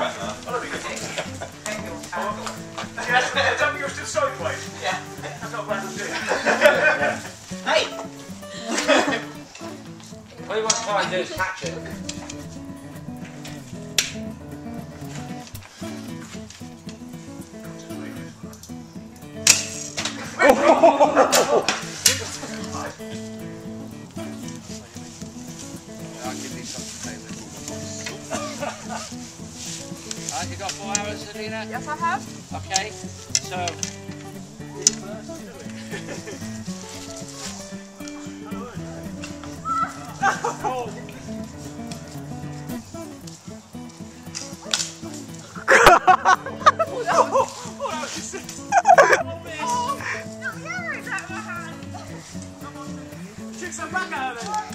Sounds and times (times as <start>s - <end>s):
Music: 0.0s - 54.7s.